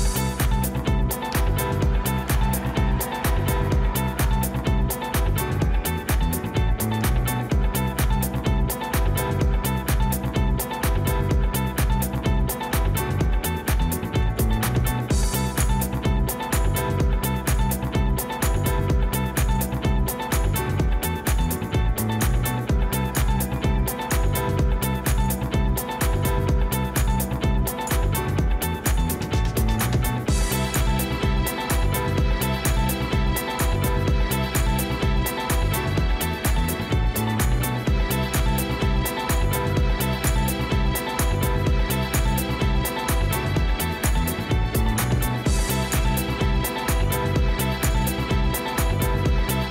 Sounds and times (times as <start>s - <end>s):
Music: 0.0s - 49.7s.